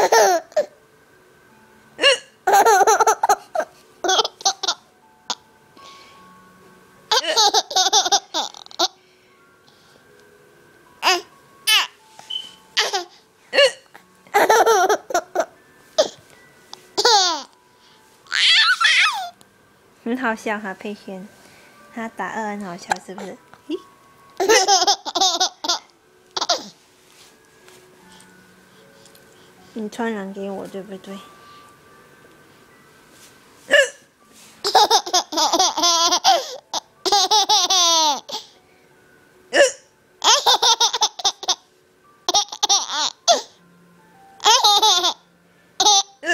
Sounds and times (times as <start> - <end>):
Speech: 20.0 - 21.3, 22.0 - 23.8, 29.8 - 31.3.